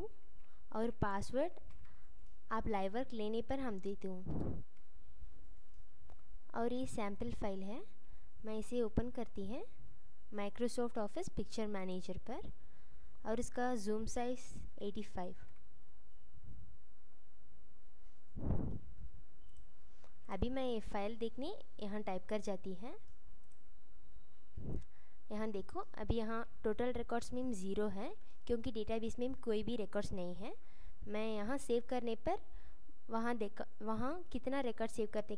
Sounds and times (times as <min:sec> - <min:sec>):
Speech: 0:00.7 - 0:01.6, 0:02.5 - 0:04.4, 0:06.5 - 0:09.7, 0:10.3 - 0:12.5, 0:13.2 - 0:15.4, 0:20.3 - 0:23.0, 0:25.3 - 0:32.4, 0:33.1 - 0:35.3.